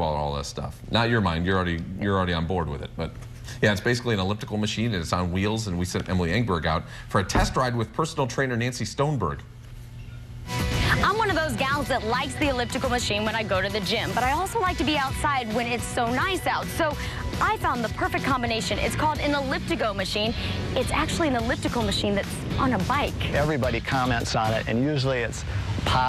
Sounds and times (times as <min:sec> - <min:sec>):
Music: 0:10.4 - 0:25.1.